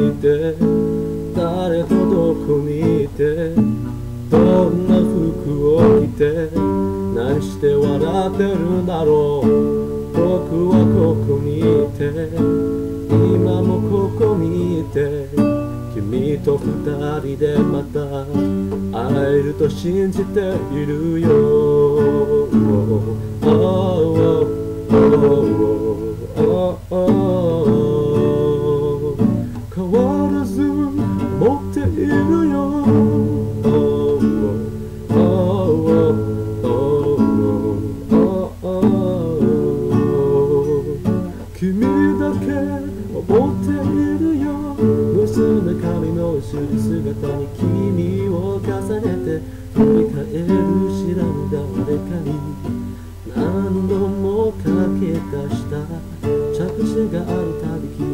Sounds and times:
Guitar: 0.0s - 58.1s
Singing: 4.3s - 12.5s, 13.1s - 58.1s.

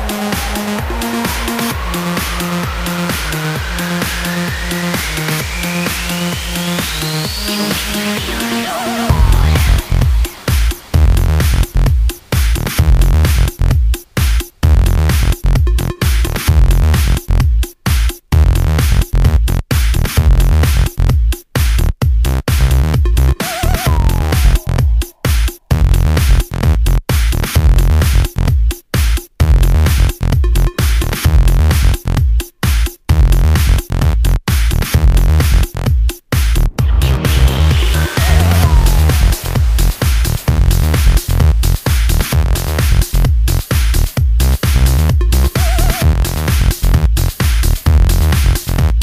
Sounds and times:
Dance music: 0.0s - 49.0s
Rhythm and blues: 0.0s - 49.0s.

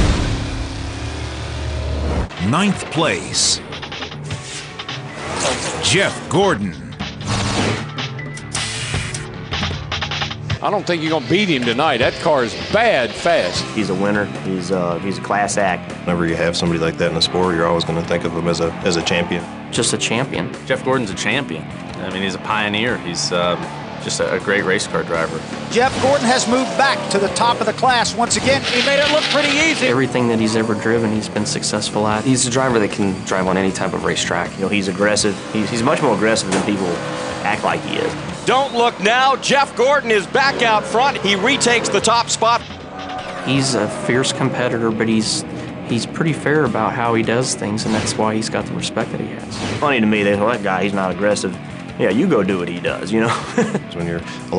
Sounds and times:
Male speech, man speaking: 2.4s - 3.7s, 5.4s - 7.0s, 10.6s - 42.7s, 43.4s - 54.5s
Narration, monologue: 10.5s - 53.2s.

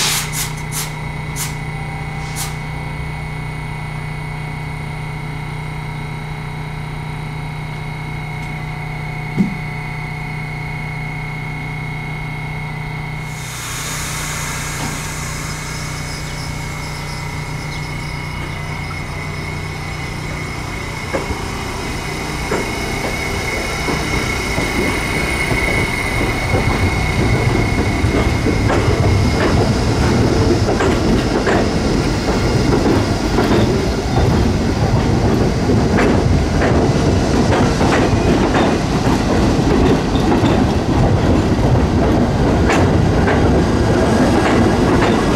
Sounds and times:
Outside, urban or manmade: 0.0s - 45.3s
Railroad car, train wagon: 0.0s - 45.3s
Train: 0.0s - 45.3s.

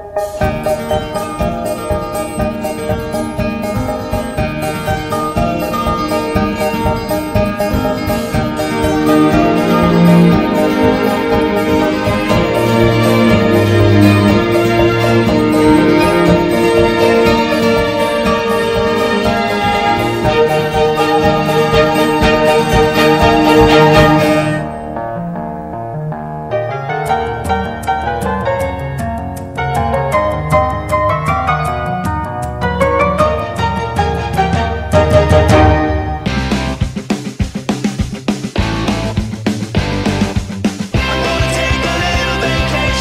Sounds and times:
Theme music: 0.0s - 28.5s, 32.6s - 37.0s.

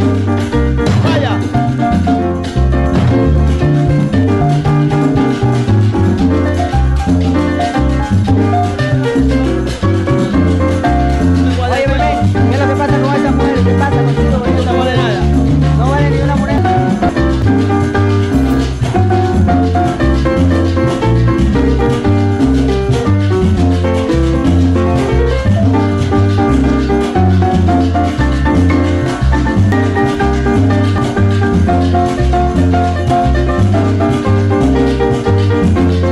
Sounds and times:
Salsa music: 0.0s - 36.1s.

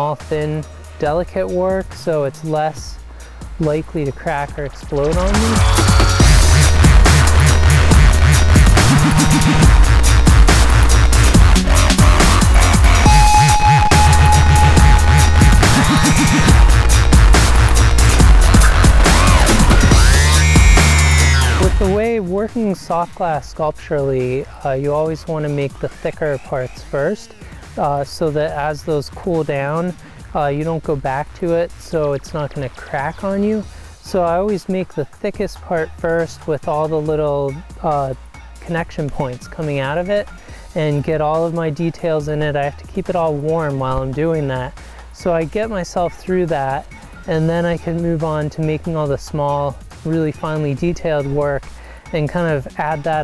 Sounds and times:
Speech: 0.0s - 3.0s, 3.6s - 5.6s, 21.6s - 53.2s
Drum and bass: 0.0s - 53.2s.

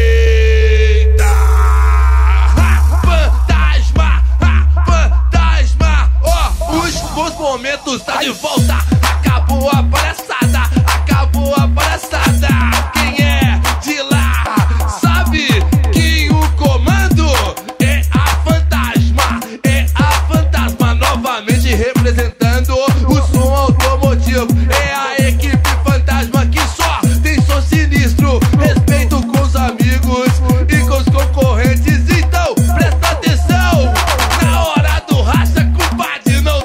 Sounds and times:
Music: 0.0s - 36.6s.

